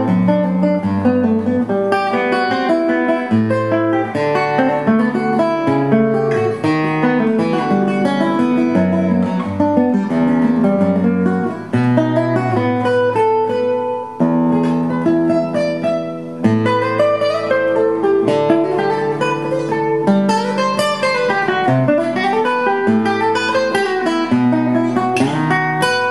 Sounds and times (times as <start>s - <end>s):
Strum: 0.0s - 26.1s.